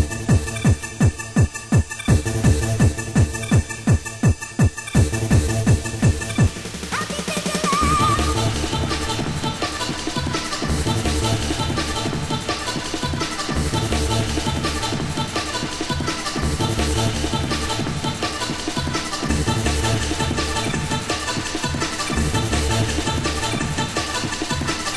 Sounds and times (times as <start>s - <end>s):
Techno: 0.0s - 24.9s.